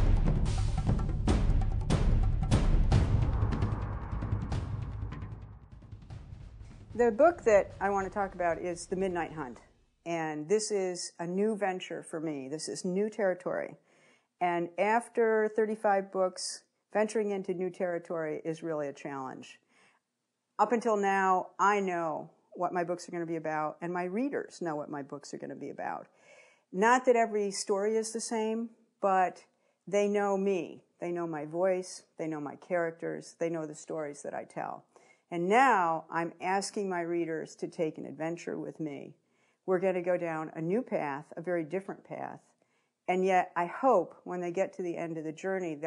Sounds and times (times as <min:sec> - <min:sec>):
Speech: 0:07.0 - 0:13.8, 0:14.4 - 0:19.6, 0:20.6 - 0:26.1, 0:26.8 - 0:34.8, 0:35.4 - 0:39.1, 0:39.7 - 0:42.4, 0:43.1 - 0:45.8.